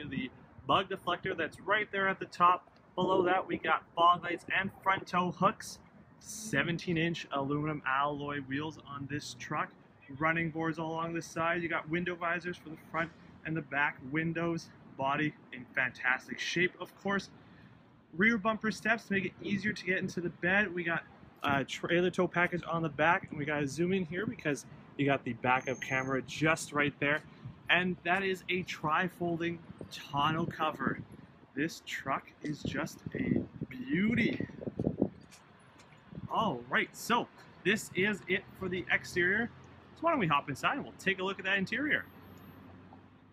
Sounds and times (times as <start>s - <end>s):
Speech: 0.0s - 17.3s, 18.2s - 31.0s, 31.6s - 34.5s, 36.3s - 42.1s.